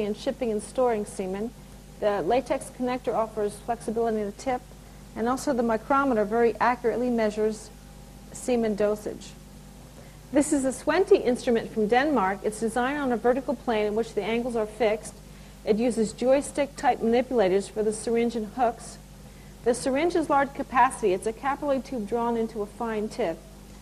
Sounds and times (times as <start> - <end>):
Speech: 0.0 - 4.6, 5.2 - 7.7, 8.4 - 9.4, 10.4 - 19.0, 19.7 - 23.4.